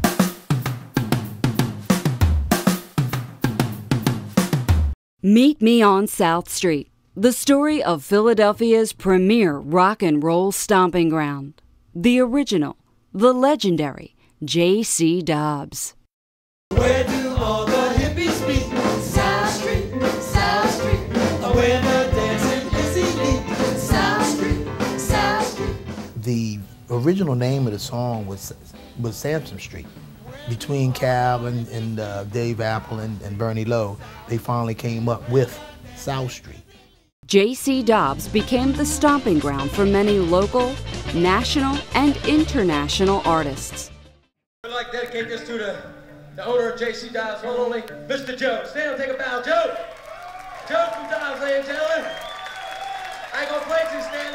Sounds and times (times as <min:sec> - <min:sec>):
Pop music: 0:16.7 - 0:26.1, 0:30.2 - 0:32.8, 0:33.6 - 0:36.9, 0:37.7 - 0:44.0.